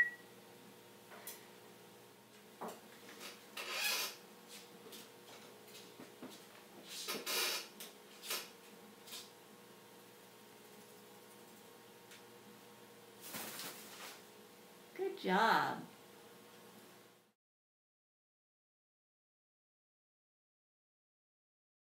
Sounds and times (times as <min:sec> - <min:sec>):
Speech: 0:15.0 - 0:15.9.